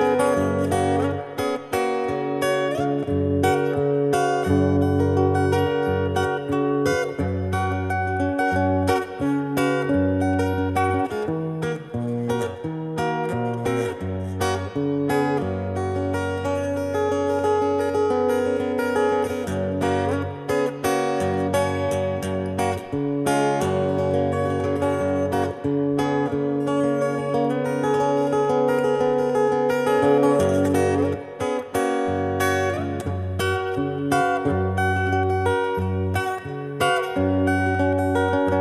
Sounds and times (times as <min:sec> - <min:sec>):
Electric guitar: 0:00.0 - 0:38.6.